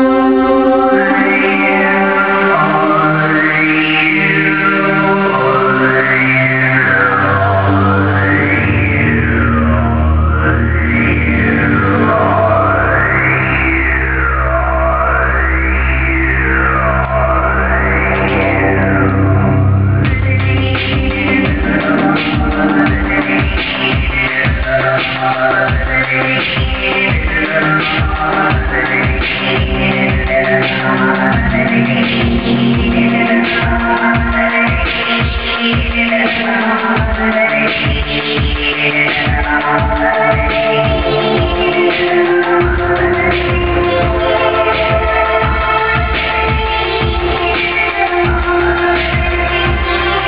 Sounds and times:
Techno: 0:00.0 - 0:50.2.

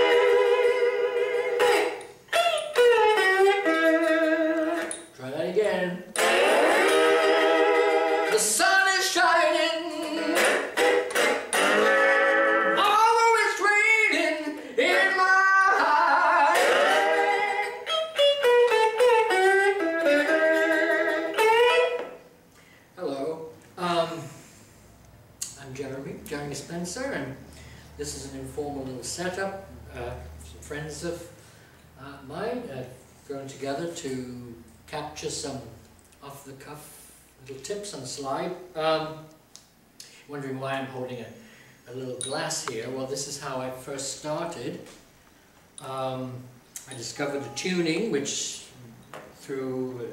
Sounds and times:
Speech: 0:05.2 - 0:06.1, 0:23.0 - 0:24.4, 0:25.5 - 0:27.4, 0:28.0 - 0:31.3, 0:32.0 - 0:39.3, 0:40.3 - 0:44.9, 0:45.8 - 0:50.1.

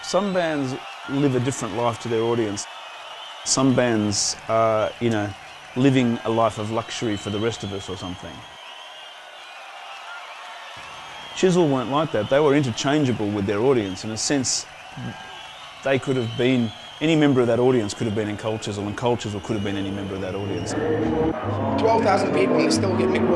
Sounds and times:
Speech: 0:00.0 - 0:02.7, 0:03.5 - 0:08.4, 0:11.4 - 0:15.2, 0:15.9 - 0:20.8, 0:21.8 - 0:23.3.

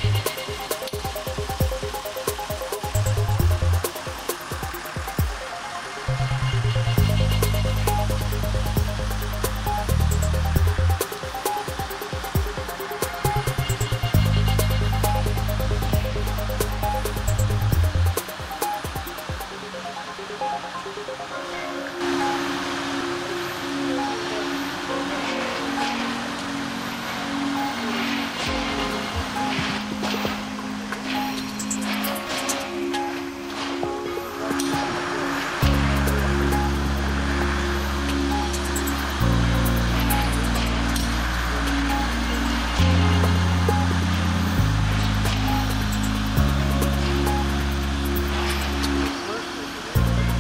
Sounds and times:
Music: 0:00.0 - 0:50.4.

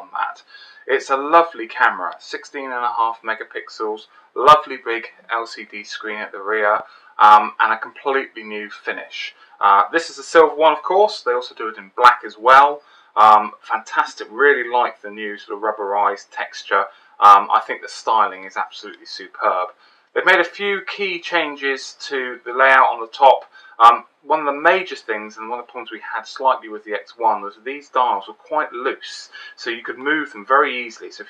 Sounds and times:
Speech: 0:00.0 - 0:31.2.

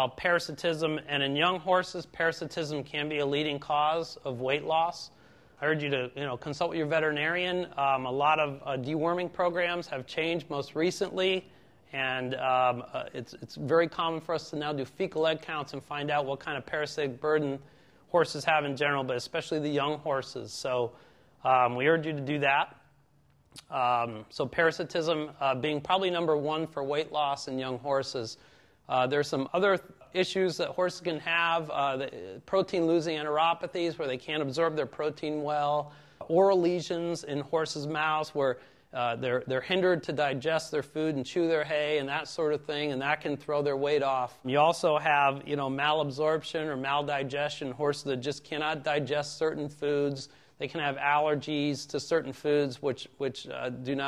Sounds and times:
Speech: 0:00.0 - 0:22.9, 0:23.6 - 0:54.0.

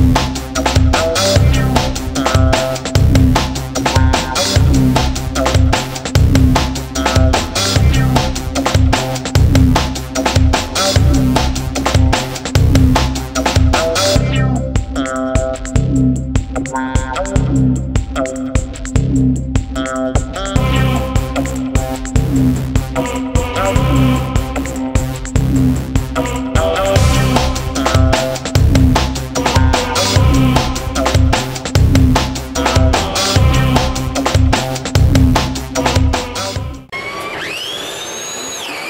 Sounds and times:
Music: 0:00.0 - 0:36.9.

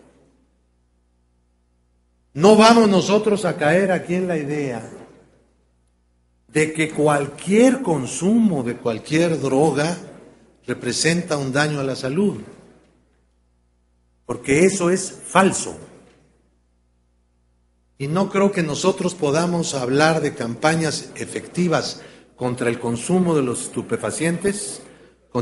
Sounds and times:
Narration, monologue: 0:00.0 - 0:25.4.

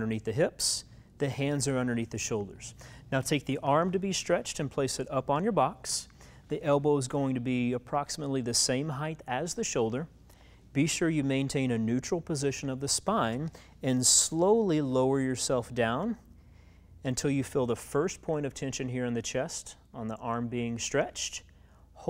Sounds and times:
Speech: 0:00.0 - 0:10.1, 0:10.8 - 0:16.2, 0:17.0 - 0:22.0.

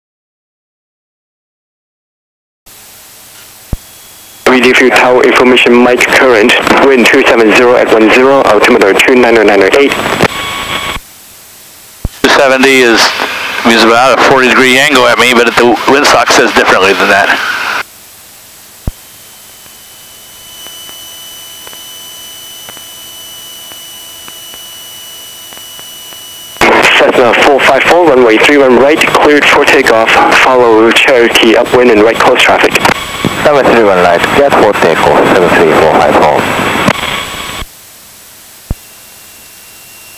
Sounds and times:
Speech: 0:04.5 - 0:09.9, 0:12.2 - 0:17.4, 0:26.6 - 0:32.8, 0:33.4 - 0:36.4.

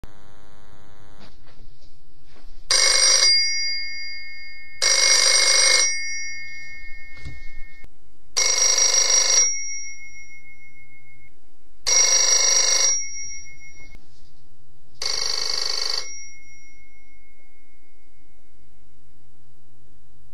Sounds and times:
Telephone bell ringing: 0:02.7 - 0:11.3, 0:11.9 - 0:14.0, 0:15.0 - 0:18.6.

